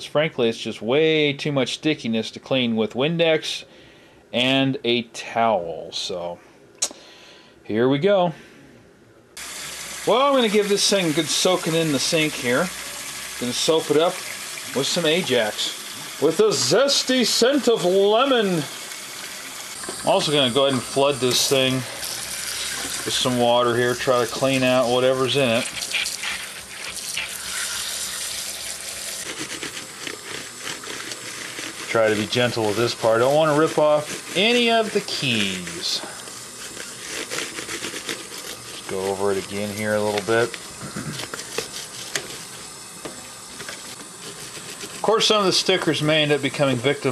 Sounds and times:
Speech: 0.0s - 3.7s, 4.4s - 6.4s, 7.7s - 8.4s, 10.1s - 12.7s, 13.4s - 18.7s, 20.0s - 22.0s, 23.1s - 25.7s, 31.9s - 36.2s, 38.8s - 40.6s, 45.0s - 47.1s.

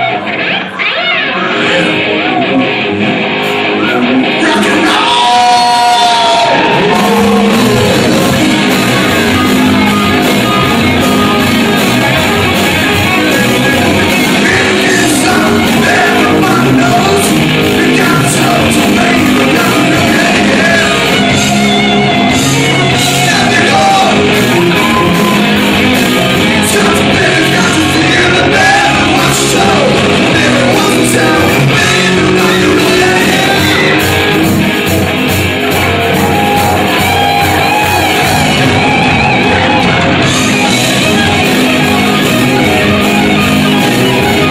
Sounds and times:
Rock and roll: 0.0s - 44.5s.

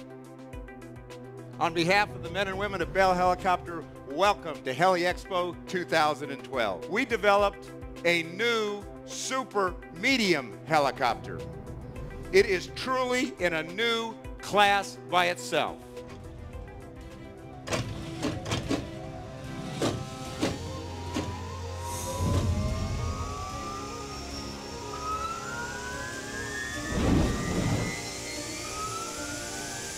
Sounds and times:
Music: 0.0s - 29.9s
Speech: 1.6s - 11.4s, 12.4s - 15.8s
Aircraft: 19.9s - 29.9s.

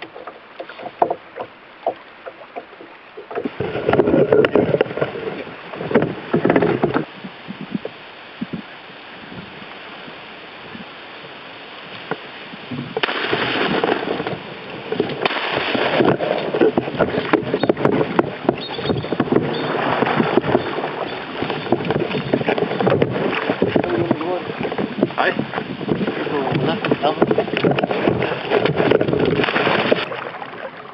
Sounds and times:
Boat, Water vehicle: 0.0s - 30.9s.

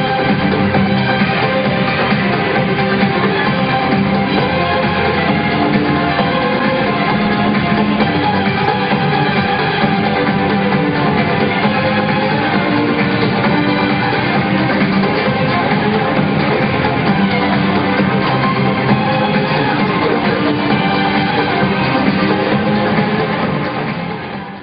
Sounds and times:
Violin, fiddle: 0.0s - 24.6s.

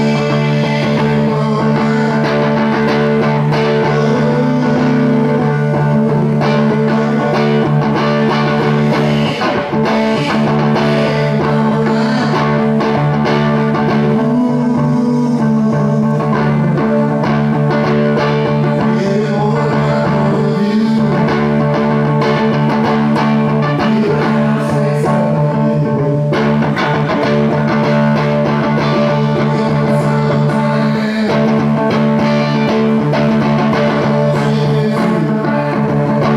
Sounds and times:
Music: 0.0s - 36.3s.

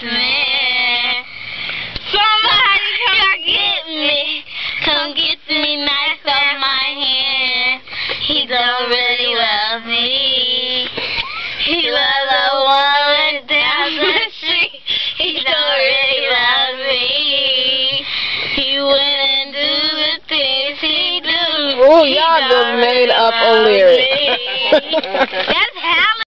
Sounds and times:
Child singing: 0.0s - 1.3s, 2.1s - 26.3s
Female singing: 0.0s - 1.3s, 2.1s - 26.3s
Speech: 21.8s - 26.3s.

